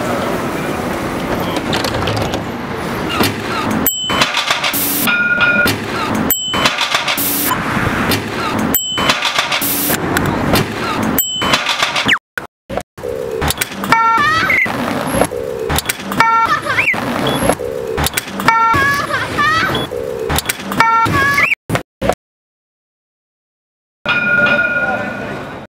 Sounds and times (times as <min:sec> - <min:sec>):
Sound effect: 0:04.0 - 0:22.2.